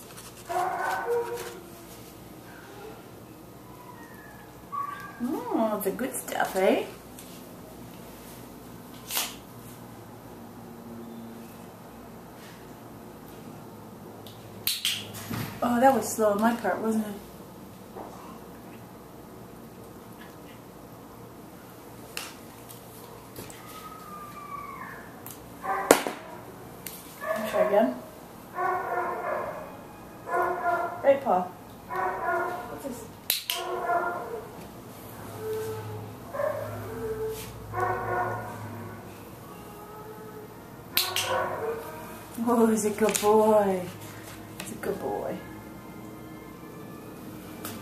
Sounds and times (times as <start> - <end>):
Domestic animals, pets: 0.2 - 5.5, 23.0 - 26.6, 31.9 - 32.8, 33.5 - 42.3.